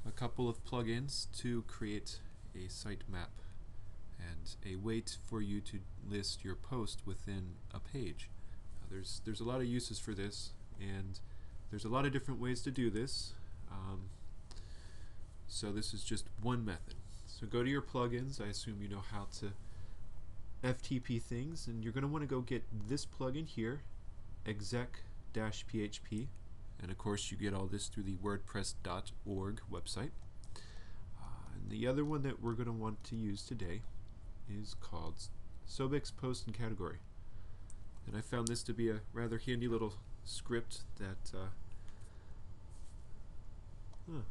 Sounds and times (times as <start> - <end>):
Speech: 0.0 - 3.4, 4.1 - 14.2, 15.5 - 19.6, 20.6 - 30.2, 31.2 - 33.9, 34.5 - 37.1, 38.0 - 41.6, 44.1 - 44.3.